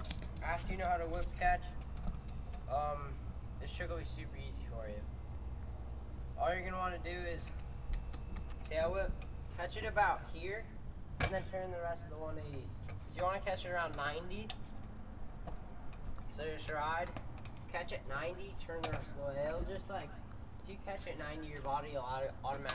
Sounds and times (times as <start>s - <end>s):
Speech: 0.4s - 1.8s, 2.7s - 5.1s, 6.4s - 7.5s, 8.7s - 14.5s, 16.3s - 22.7s.